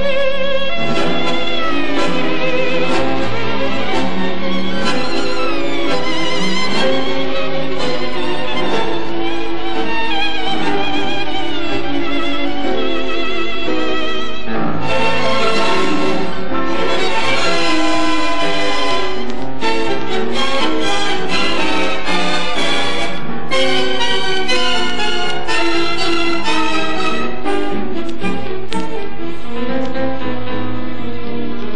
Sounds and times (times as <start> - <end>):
Accordion: 0.0 - 29.9
Bowed string instrument: 0.0 - 31.7
Orchestra: 0.0 - 31.7.